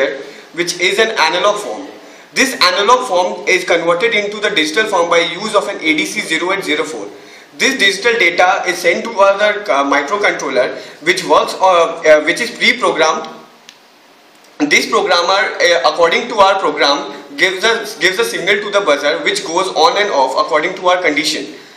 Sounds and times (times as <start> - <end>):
Speech: 0.0 - 13.5, 14.6 - 21.6.